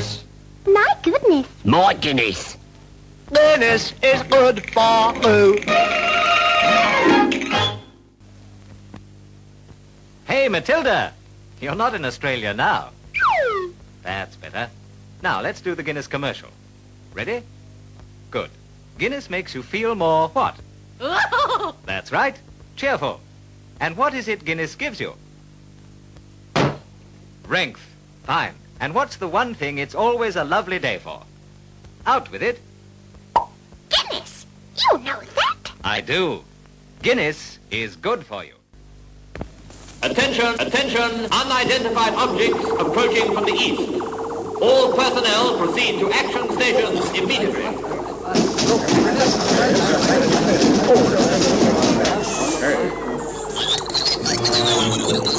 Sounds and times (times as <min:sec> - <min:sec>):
Speech: 0:00.0 - 0:02.6, 0:10.3 - 0:13.0, 0:14.0 - 0:16.6, 0:17.2 - 0:17.5, 0:18.3 - 0:21.3, 0:21.9 - 0:23.2, 0:23.8 - 0:25.2, 0:27.5 - 0:31.3, 0:32.0 - 0:32.6, 0:33.9 - 0:38.6, 0:40.0 - 0:44.0, 0:44.6 - 0:53.2
Music: 0:03.4 - 0:08.2, 0:54.2 - 0:55.3.